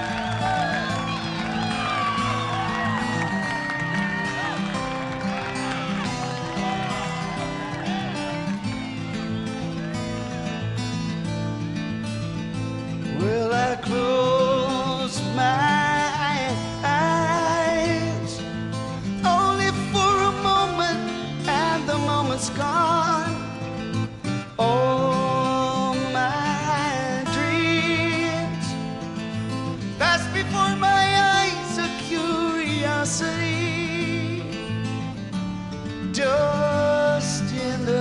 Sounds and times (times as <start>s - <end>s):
Music: 0.0s - 38.0s.